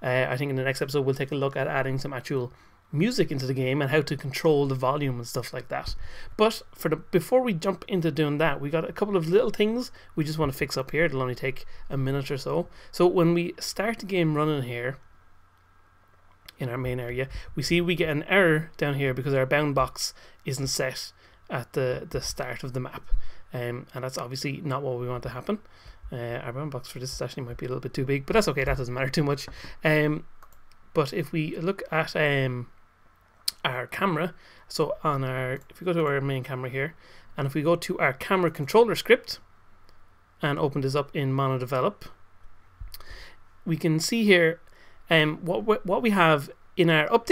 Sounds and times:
Speech: 0:00.0 - 0:15.0, 0:16.5 - 0:30.3, 0:31.0 - 0:32.7, 0:33.5 - 0:39.5, 0:40.4 - 0:42.2, 0:43.7 - 0:47.3.

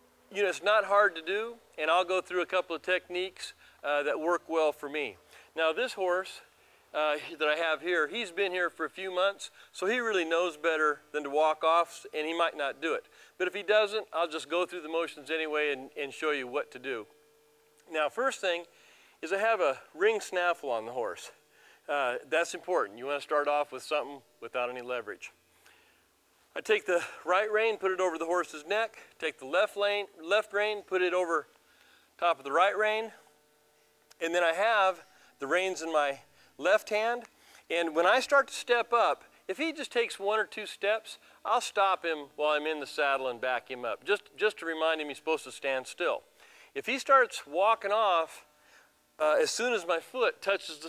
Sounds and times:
Speech: 0:00.3 - 0:17.1, 0:17.9 - 0:25.4, 0:26.6 - 0:31.5, 0:32.2 - 0:33.2, 0:34.2 - 0:46.2, 0:46.8 - 0:48.5, 0:49.2 - 0:50.8.

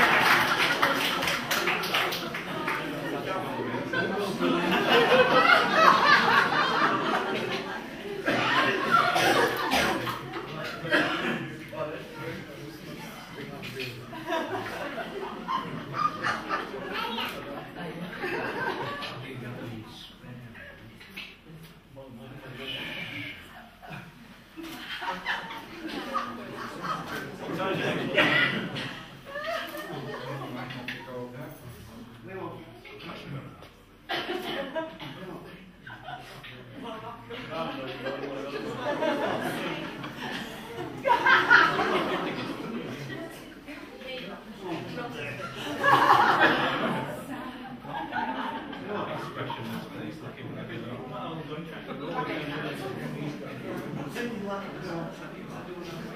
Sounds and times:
Speech: 0:00.9 - 0:23.7, 0:24.9 - 0:56.1.

